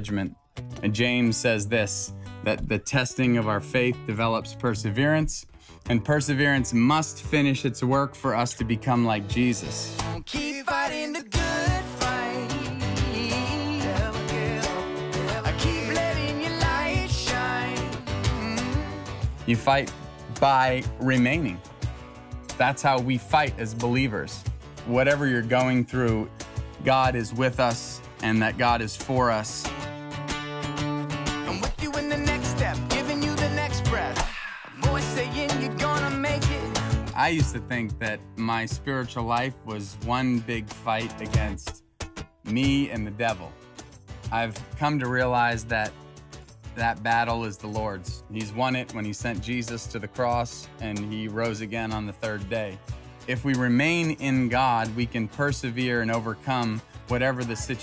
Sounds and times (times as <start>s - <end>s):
Speech: 0.0s - 10.0s, 19.5s - 21.6s, 22.6s - 29.7s, 31.5s - 32.1s, 37.2s - 41.8s, 42.5s - 43.6s, 44.3s - 46.0s, 46.8s - 57.8s
Music: 0.0s - 57.8s.